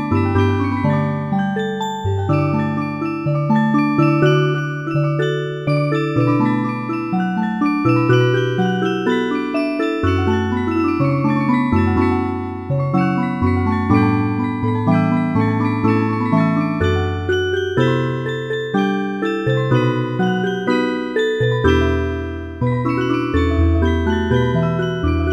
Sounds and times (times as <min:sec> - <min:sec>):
Music: 0:00.0 - 0:25.3.